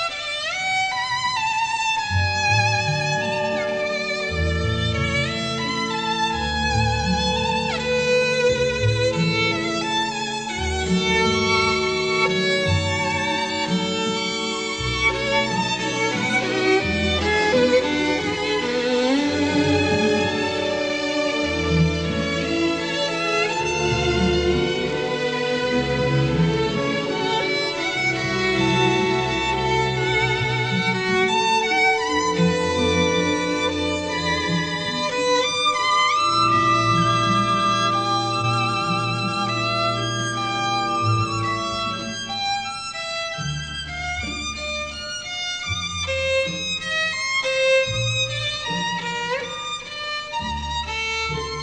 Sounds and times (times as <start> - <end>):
Violin, fiddle: 0.0 - 51.6.